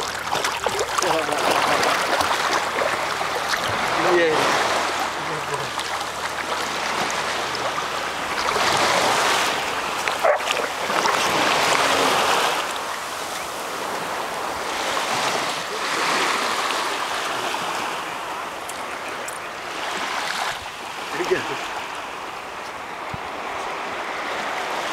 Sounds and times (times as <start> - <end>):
Ocean: 0.0 - 24.9
Speech: 0.9 - 2.0, 4.0 - 4.6, 5.2 - 5.7, 21.1 - 21.6
Dog: 10.2 - 10.7.